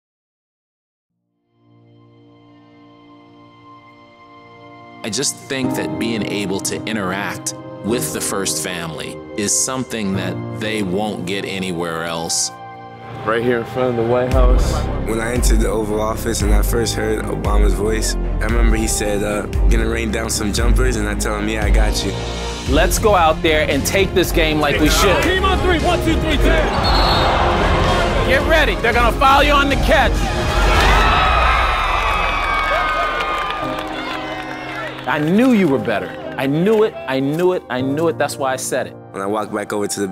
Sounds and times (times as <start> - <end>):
Music: 1.2 - 40.1
Speech: 5.0 - 12.5, 13.2 - 26.7, 28.3 - 30.1, 35.1 - 40.1.